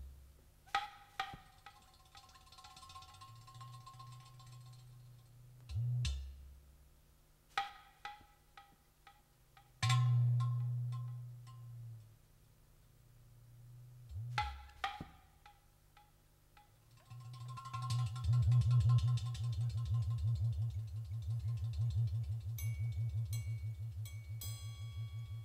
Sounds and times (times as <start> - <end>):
Music: 0.0 - 25.4.